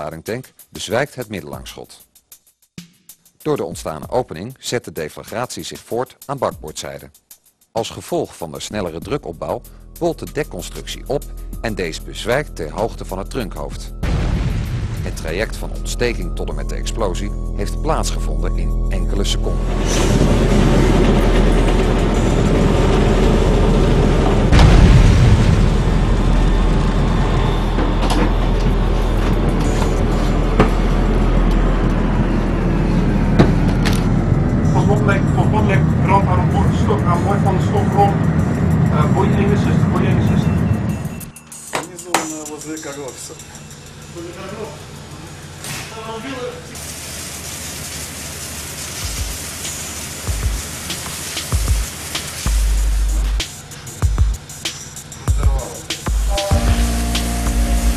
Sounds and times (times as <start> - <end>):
Speech: 0.0 - 2.0, 3.4 - 7.1, 7.8 - 14.0, 15.0 - 19.6, 34.7 - 38.2, 38.9 - 40.5, 41.8 - 43.5, 44.2 - 44.8, 45.8 - 46.8, 55.3 - 56.7
Music: 0.0 - 33.4, 34.0 - 45.6, 49.0 - 57.9
Boom: 14.0 - 15.9, 23.5 - 29.2.